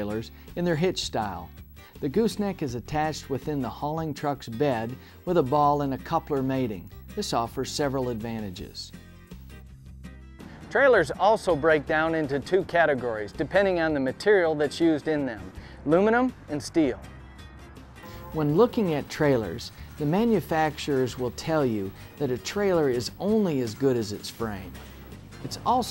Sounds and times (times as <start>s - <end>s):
Speech: 0.0s - 8.9s, 10.7s - 17.0s, 18.4s - 24.8s, 25.4s - 25.9s
Music: 0.0s - 25.9s.